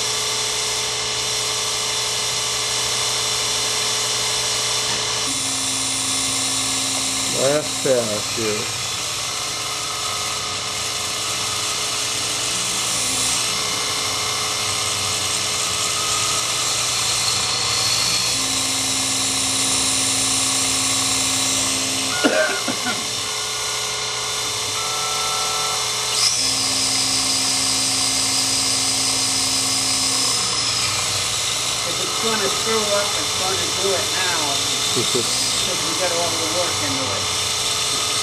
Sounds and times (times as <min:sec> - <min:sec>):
Tools: 0:26.1 - 0:27.0.